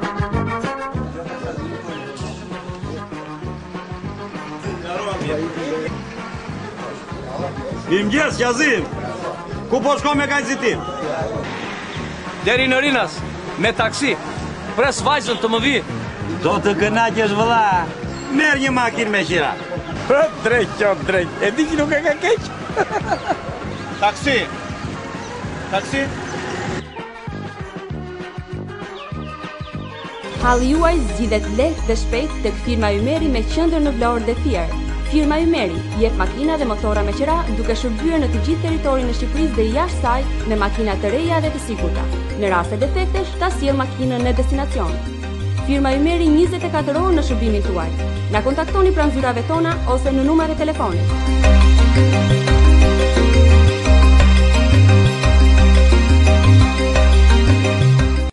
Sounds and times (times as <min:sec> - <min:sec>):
Music: 0:00.0 - 0:58.3.